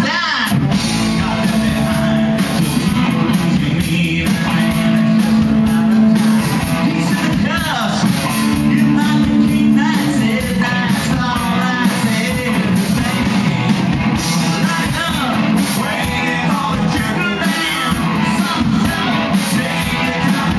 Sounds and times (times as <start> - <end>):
Guitar: 0.0 - 20.5
Rock music: 0.0 - 20.5
Singing: 0.0 - 20.5.